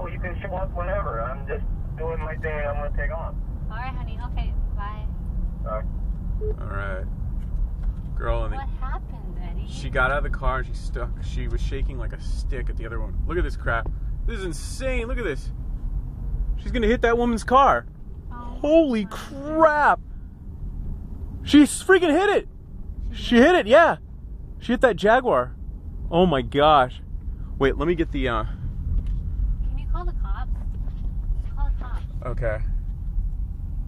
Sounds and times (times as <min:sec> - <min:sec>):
Vehicle: 0:00.0 - 0:33.8.